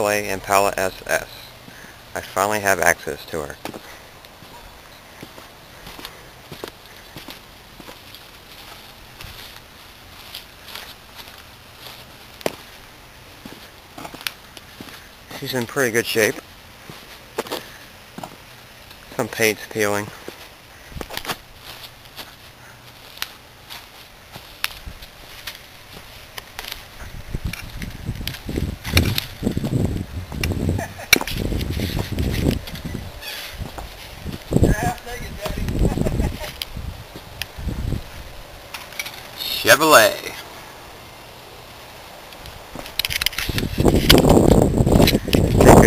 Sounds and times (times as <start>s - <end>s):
Speech: 0.0s - 1.5s, 2.2s - 3.6s, 15.3s - 16.4s, 19.1s - 20.2s, 34.7s - 35.8s, 39.4s - 40.4s
Walk, footsteps: 5.2s - 12.8s, 13.4s - 15.0s.